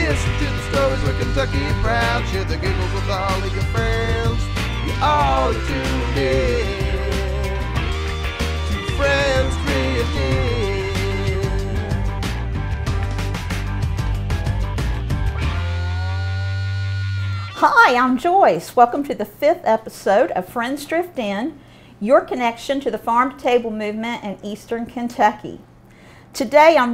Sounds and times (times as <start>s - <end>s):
Music: 0.0s - 17.8s
Speech: 17.6s - 25.6s, 26.4s - 26.9s.